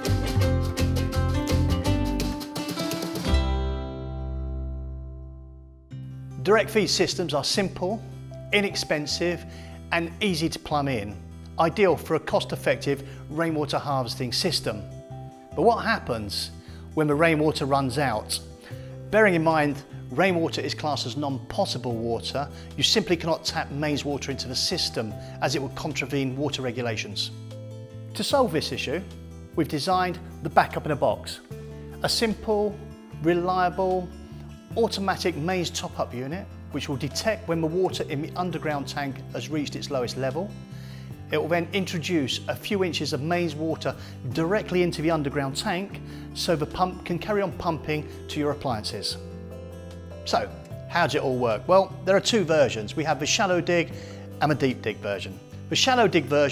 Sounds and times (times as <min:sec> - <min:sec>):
Music: 0:00.0 - 0:56.5
Speech: 0:06.4 - 0:14.9, 0:15.6 - 0:18.5, 0:19.1 - 0:27.4, 0:28.2 - 0:34.1, 0:34.7 - 0:40.5, 0:41.3 - 0:49.2, 0:50.3 - 0:56.5.